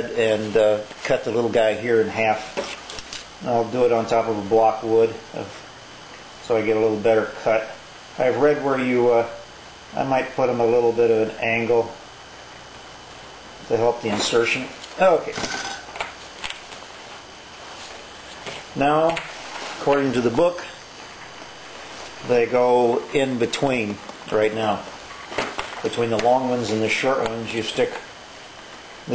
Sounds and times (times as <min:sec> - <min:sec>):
Speech: 0:00.0 - 0:02.6, 0:03.4 - 0:05.6, 0:06.4 - 0:12.0, 0:13.7 - 0:15.4, 0:18.8 - 0:20.8, 0:22.2 - 0:24.9, 0:25.8 - 0:28.1.